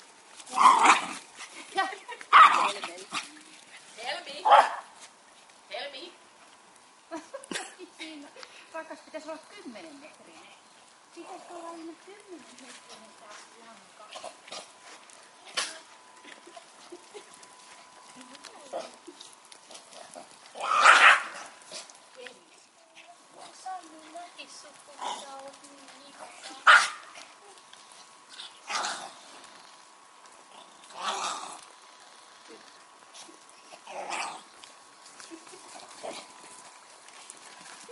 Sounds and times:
Dog: 2.3 - 4.9, 14.1 - 22.0, 26.2 - 27.6.

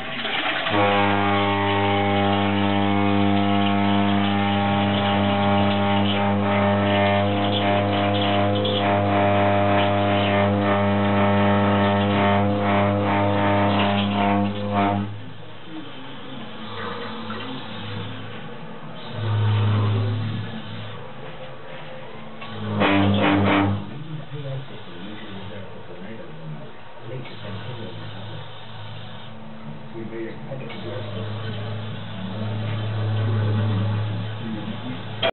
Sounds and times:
Inside, small room: 0.0 - 35.3
Speech: 14.2 - 20.8, 23.1 - 28.6, 29.9 - 35.3.

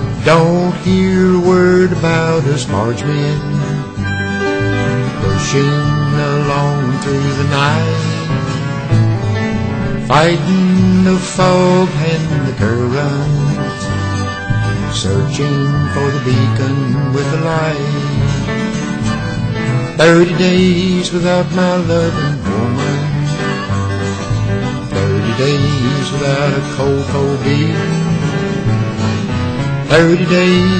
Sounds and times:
Music: 0.0 - 30.7.

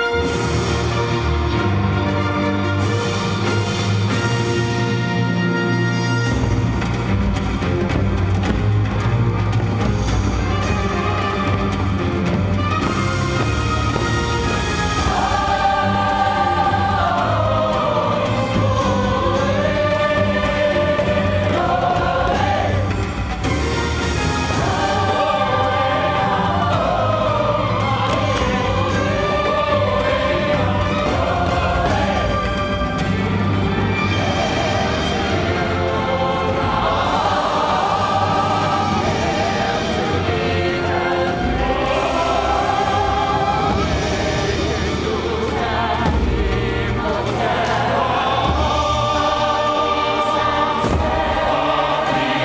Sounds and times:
Music: 0.0 - 52.4.

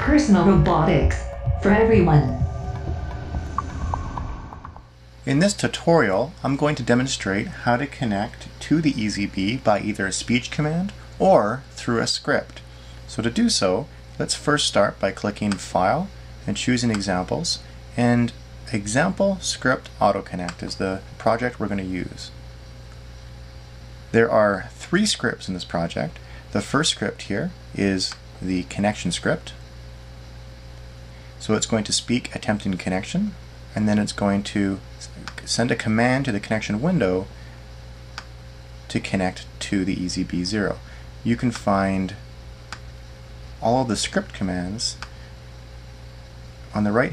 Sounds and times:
Narration, monologue: 4.9 - 47.1
Male speech, man speaking: 5.3 - 22.4, 24.1 - 29.6, 31.4 - 37.3, 38.9 - 42.2, 43.6 - 45.0, 46.7 - 47.1.

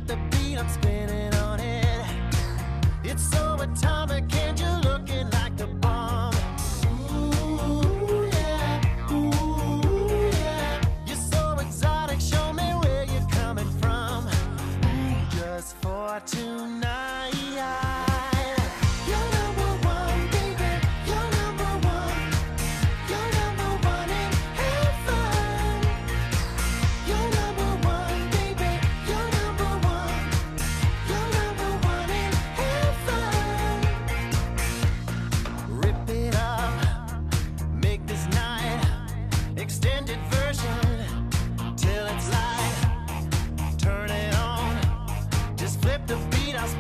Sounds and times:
Music: 0.0 - 46.8.

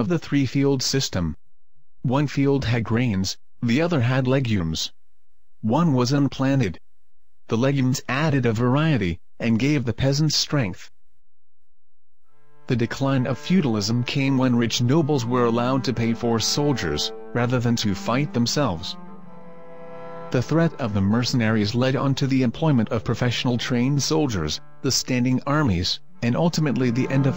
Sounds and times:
Speech: 0.0 - 1.4, 2.1 - 5.0, 5.6 - 6.8, 7.5 - 10.9, 12.7 - 19.0, 20.4 - 27.3.

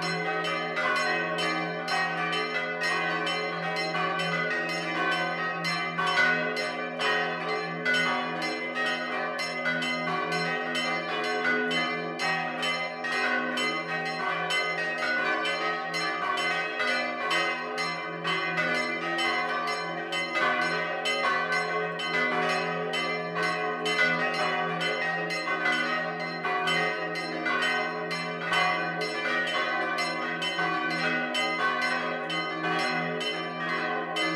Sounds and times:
Change ringing (campanology): 0.0 - 34.3.

